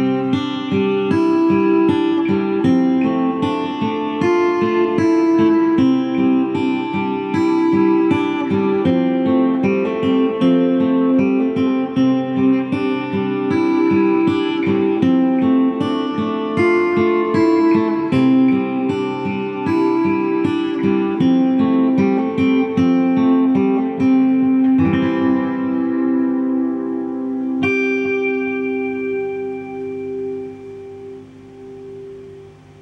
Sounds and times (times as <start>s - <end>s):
Guitar: 0.0s - 32.8s.